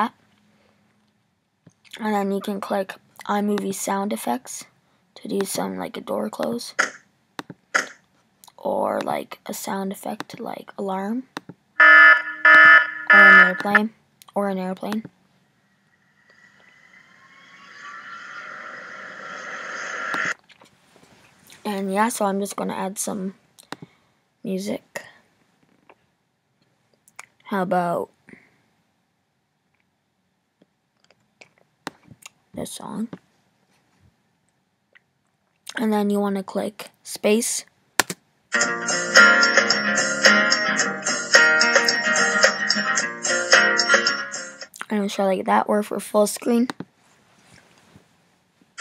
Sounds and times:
Speech: 0:02.0 - 0:06.8, 0:08.5 - 0:11.3, 0:13.1 - 0:15.1, 0:21.6 - 0:23.4, 0:24.4 - 0:25.2, 0:27.4 - 0:28.2, 0:32.6 - 0:33.2, 0:35.7 - 0:37.7, 0:44.8 - 0:46.8
Alarm: 0:11.8 - 0:13.8.

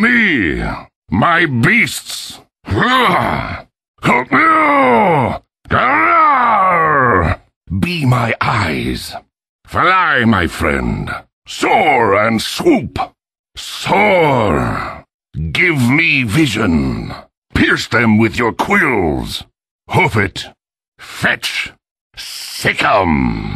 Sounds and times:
Speech: 0:00.0 - 0:23.5
Groan: 0:02.7 - 0:07.5, 0:13.8 - 0:15.1, 0:22.8 - 0:23.5.

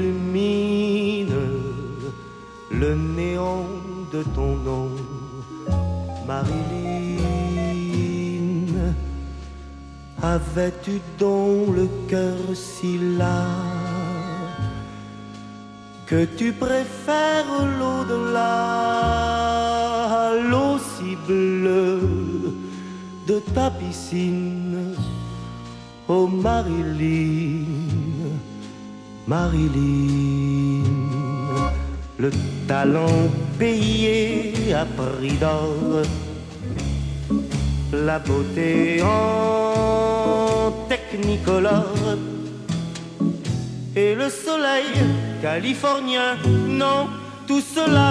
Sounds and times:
Music: 0:00.0 - 0:48.1.

